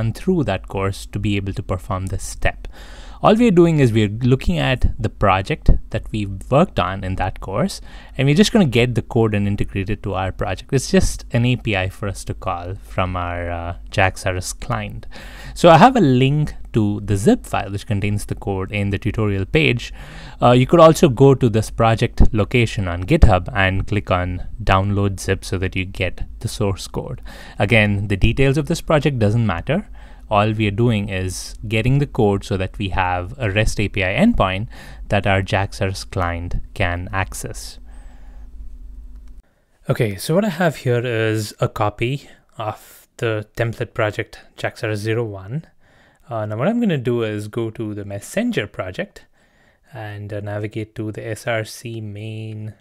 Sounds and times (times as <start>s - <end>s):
Speech: 0.0s - 37.8s, 39.8s - 49.3s, 49.9s - 52.8s.